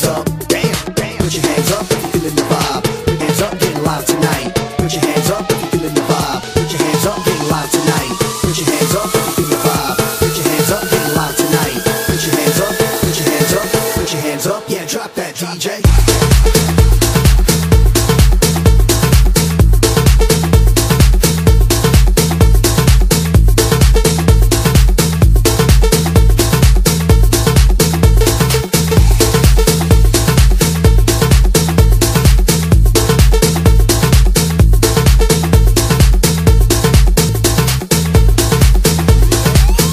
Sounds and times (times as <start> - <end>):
Music: 0.0 - 39.9.